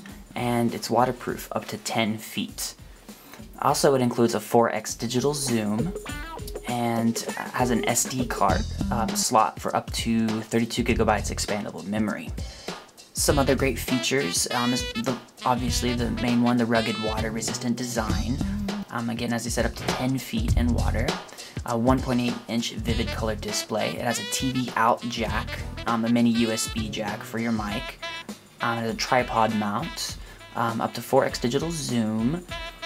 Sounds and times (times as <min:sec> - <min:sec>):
Music: 0:00.0 - 0:32.8
Speech: 0:00.4 - 0:02.8, 0:03.6 - 0:06.0, 0:06.6 - 0:12.5, 0:13.2 - 0:28.0, 0:28.6 - 0:32.5.